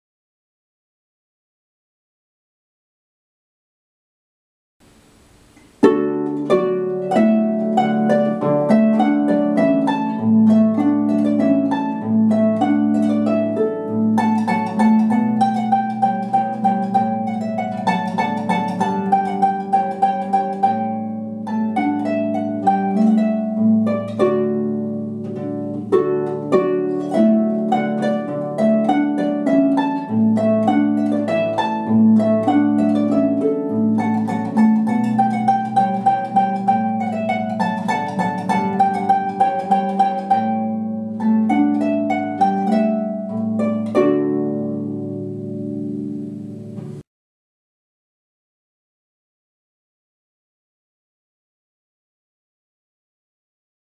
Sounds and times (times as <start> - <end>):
New-age music: 5.6 - 47.0.